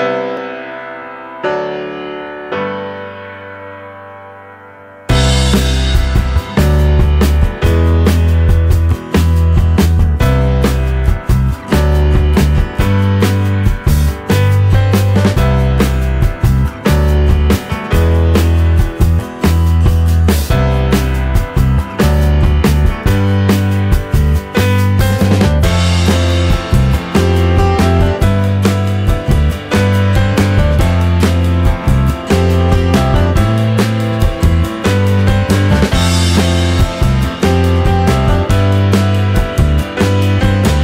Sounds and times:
Music: 0:00.0 - 0:40.8.

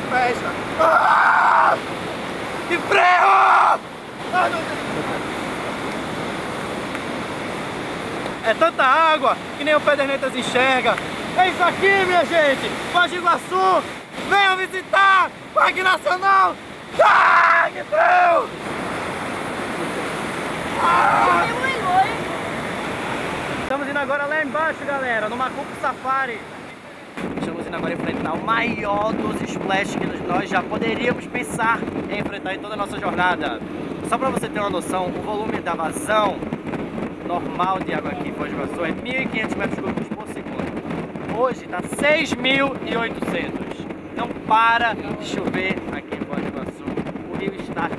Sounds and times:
Water: 0:00.0 - 0:47.9.

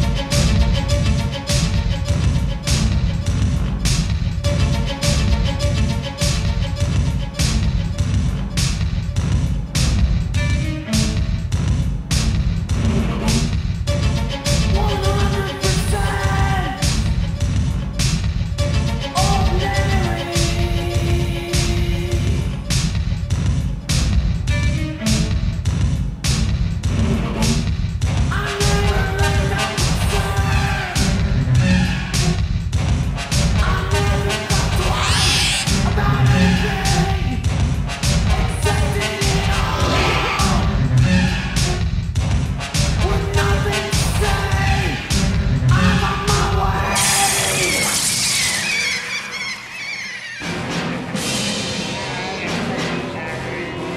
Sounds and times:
Music: 0:00.0 - 0:53.9.

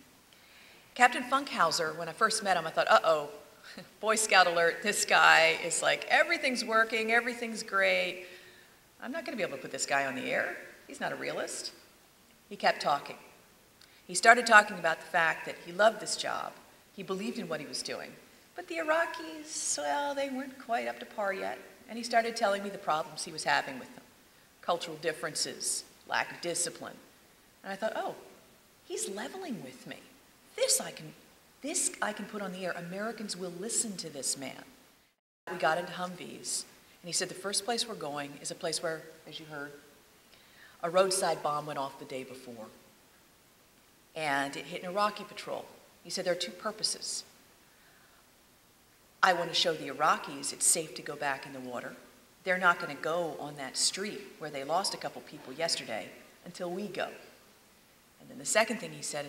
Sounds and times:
Speech: 0:01.0 - 0:08.2, 0:09.0 - 0:11.8, 0:12.5 - 0:13.3, 0:14.1 - 0:24.0, 0:24.6 - 0:27.0, 0:27.6 - 0:28.3, 0:28.9 - 0:34.8, 0:35.5 - 0:39.8, 0:40.8 - 0:42.8, 0:44.2 - 0:47.3, 0:49.2 - 0:57.4, 0:58.2 - 0:59.2.

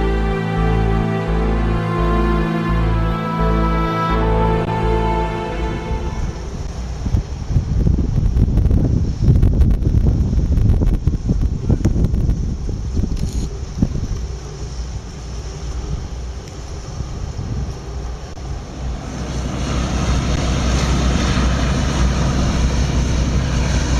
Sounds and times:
Boat, Water vehicle: 0:00.0 - 0:23.9
Outside, urban or manmade: 0:00.0 - 0:23.9.

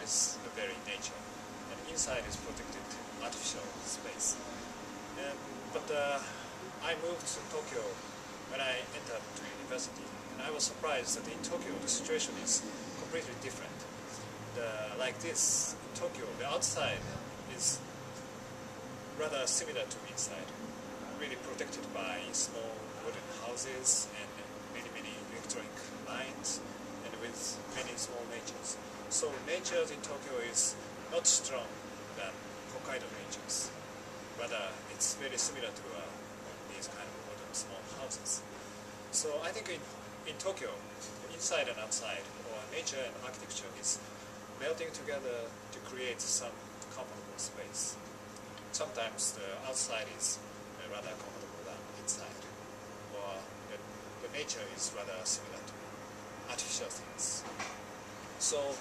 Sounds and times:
Speech: 0:00.0 - 0:04.6, 0:05.2 - 0:13.9, 0:14.5 - 0:17.9, 0:19.2 - 0:33.8, 0:34.4 - 0:38.5, 0:39.1 - 0:48.0, 0:48.6 - 0:55.8, 0:56.5 - 0:57.6, 0:58.4 - 0:58.8.

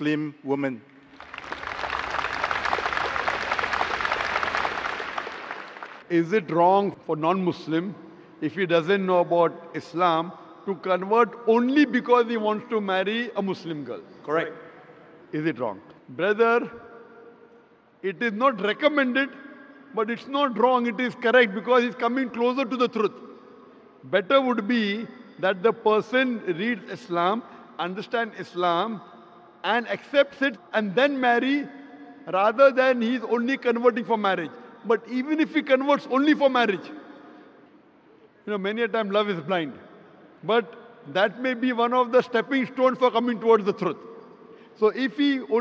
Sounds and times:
Speech: 0:00.0 - 0:00.8, 0:06.1 - 0:14.6, 0:15.3 - 0:16.8, 0:18.0 - 0:19.4, 0:20.0 - 0:23.2, 0:24.0 - 0:29.0, 0:29.6 - 0:31.7, 0:32.3 - 0:37.0, 0:38.4 - 0:39.8, 0:40.4 - 0:44.0, 0:44.8 - 0:45.6.

